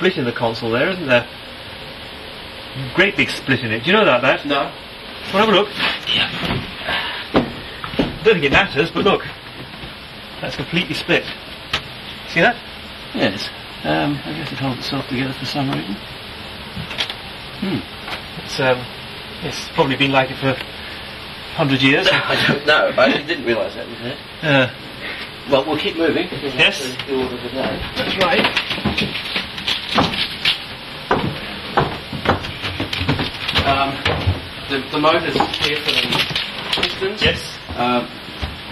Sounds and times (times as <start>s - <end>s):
Speech: 0.0s - 1.3s, 2.8s - 6.5s, 8.2s - 9.3s, 10.4s - 11.4s, 12.3s - 16.0s, 17.6s - 20.6s, 21.6s - 24.8s, 25.5s - 28.5s, 33.6s - 34.1s, 34.7s - 38.1s.